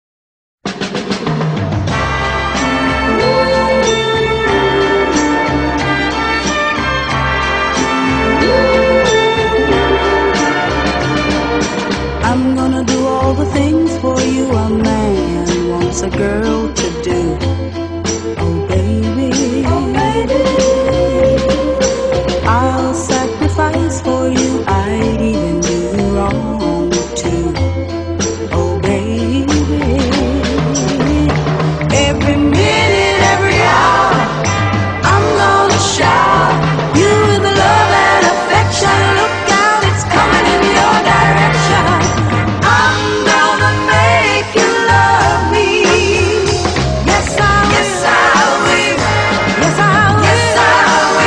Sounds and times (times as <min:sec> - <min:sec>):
Music: 0:00.6 - 0:51.2.